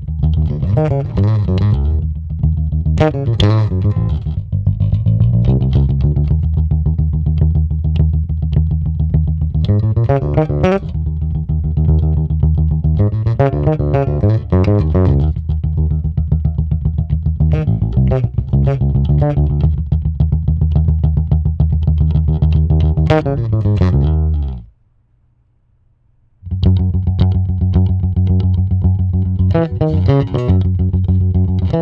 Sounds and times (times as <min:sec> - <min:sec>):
Music: 0:00.0 - 0:24.7, 0:26.5 - 0:31.8.